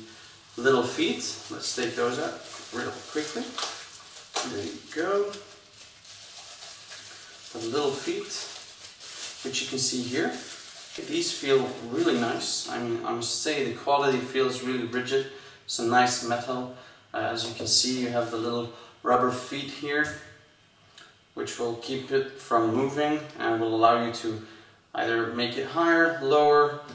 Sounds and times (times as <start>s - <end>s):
Speech: 0.0s - 3.6s, 4.4s - 5.5s, 7.5s - 8.6s, 9.4s - 20.4s, 21.4s - 26.9s.